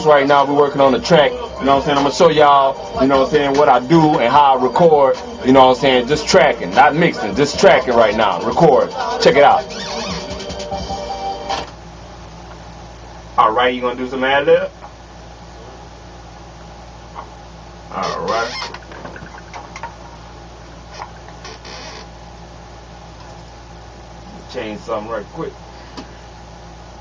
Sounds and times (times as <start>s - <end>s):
Speech: 0.0s - 9.6s, 13.4s - 14.8s, 17.9s - 18.6s, 24.3s - 25.6s
Music: 0.0s - 11.7s.